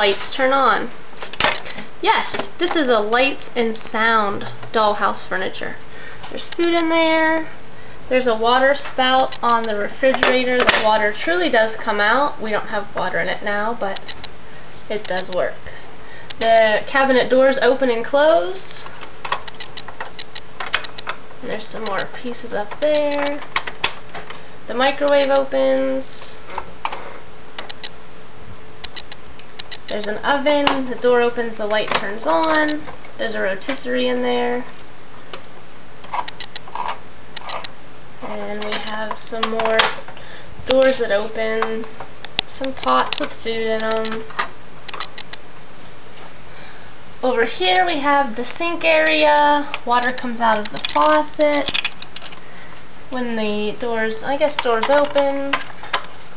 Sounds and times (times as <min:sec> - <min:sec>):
Speech: 0:00.0 - 0:00.9, 0:02.0 - 0:14.0, 0:14.9 - 0:15.8, 0:16.4 - 0:18.9, 0:21.4 - 0:23.4, 0:24.7 - 0:26.4, 0:29.9 - 0:34.7, 0:38.2 - 0:40.0, 0:40.7 - 0:44.3, 0:47.2 - 0:51.8, 0:53.1 - 0:55.6.